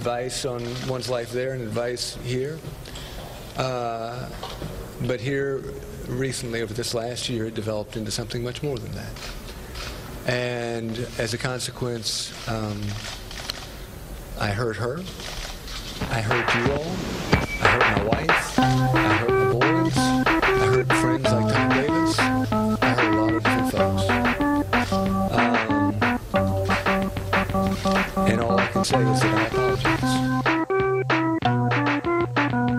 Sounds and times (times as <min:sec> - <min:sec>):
Speech: 0:10.3 - 0:13.0, 0:16.1 - 0:17.0, 0:17.6 - 0:22.2, 0:22.8 - 0:24.1, 0:28.3 - 0:30.3
Harpsichord: 0:17.6 - 0:32.7.